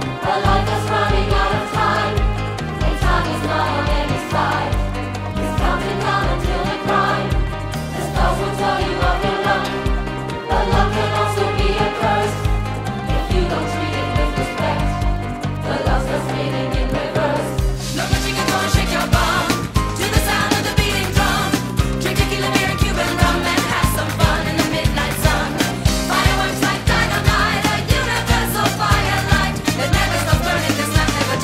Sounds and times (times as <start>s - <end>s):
Music: 0.0s - 31.4s.